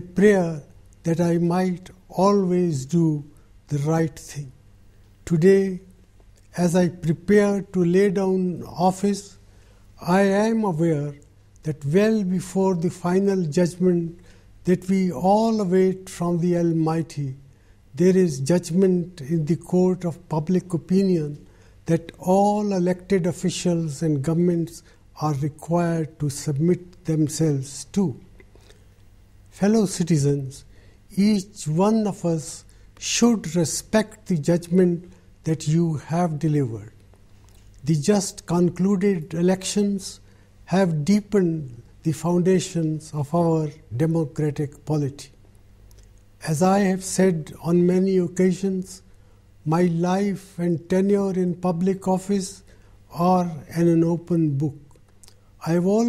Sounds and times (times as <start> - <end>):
Male speech, man speaking: 0.0 - 4.6, 5.3 - 5.9, 6.5 - 9.4, 10.0 - 17.4, 18.0 - 28.3, 29.6 - 37.0, 37.8 - 45.4, 46.4 - 54.9, 55.6 - 56.0
Narration, monologue: 0.0 - 56.0.